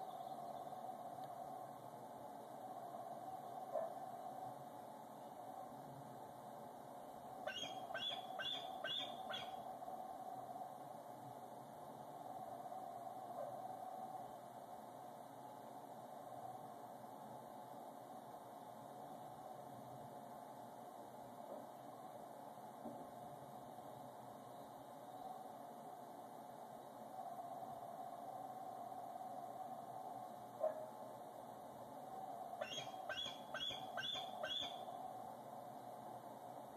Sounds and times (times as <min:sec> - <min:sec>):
Animal: 0:07.5 - 0:09.6, 0:32.2 - 0:35.0.